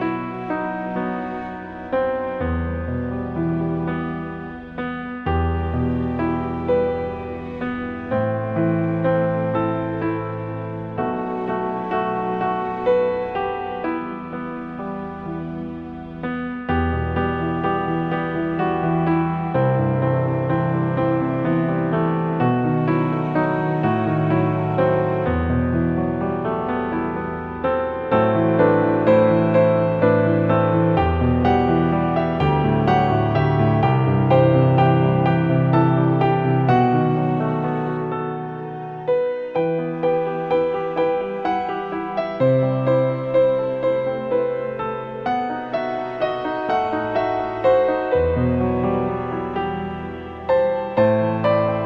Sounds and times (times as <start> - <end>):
Classical music: 0.0 - 51.8.